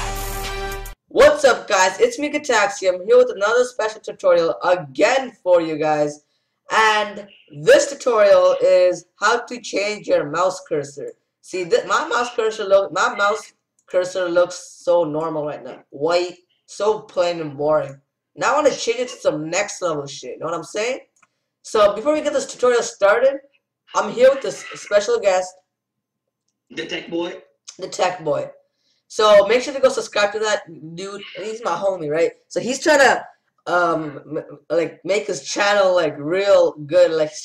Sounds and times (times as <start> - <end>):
Speech: 1.1 - 21.1, 21.7 - 23.4, 24.0 - 25.6, 26.8 - 37.4.